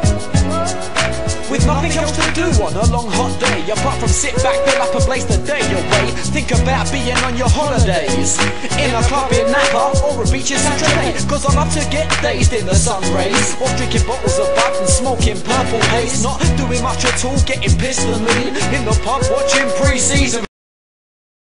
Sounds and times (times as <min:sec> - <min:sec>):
Reggae: 0:00.0 - 0:20.5.